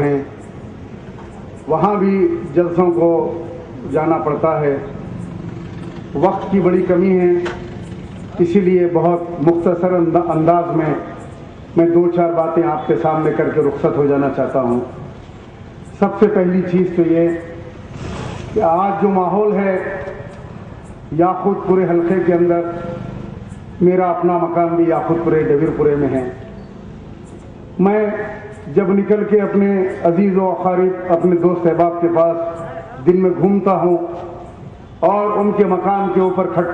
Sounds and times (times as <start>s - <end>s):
Male speech, man speaking: 0.0s - 0.3s, 1.7s - 4.9s, 6.2s - 7.6s, 8.4s - 11.2s, 11.8s - 15.0s, 16.0s - 17.6s, 18.6s - 20.3s, 21.1s - 23.0s, 23.8s - 26.4s, 27.8s - 34.2s, 35.0s - 36.7s
Narration, monologue: 0.0s - 36.7s.